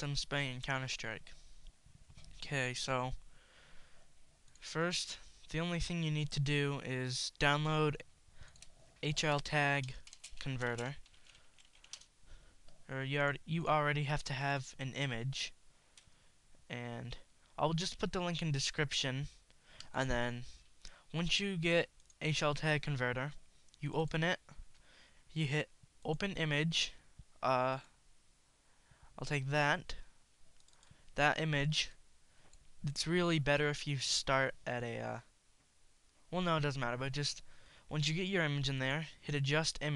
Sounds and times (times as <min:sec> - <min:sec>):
Speech: 0:00.0 - 0:01.4, 0:02.4 - 0:03.2, 0:04.6 - 0:08.1, 0:09.0 - 0:11.0, 0:12.9 - 0:15.6, 0:16.7 - 0:24.6, 0:25.3 - 0:27.9, 0:29.2 - 0:30.1, 0:31.2 - 0:32.0, 0:32.8 - 0:35.3, 0:36.3 - 0:39.9.